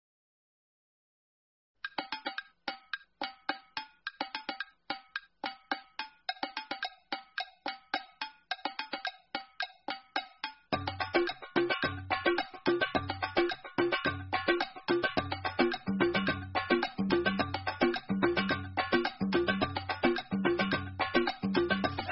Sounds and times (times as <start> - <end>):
Musical instrument: 1.9 - 22.1.